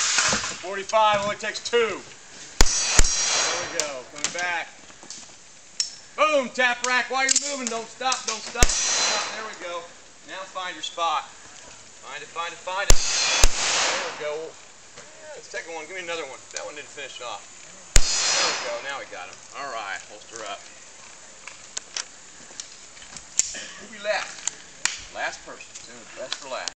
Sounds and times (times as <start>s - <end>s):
Speech: 0.6s - 2.1s, 3.4s - 4.8s, 6.2s - 11.3s, 12.0s - 12.9s, 13.9s - 17.4s, 18.4s - 20.7s, 23.7s - 24.4s, 25.1s - 26.7s
Bang: 2.6s - 4.0s, 8.5s - 9.9s, 12.9s - 14.5s, 18.0s - 19.1s.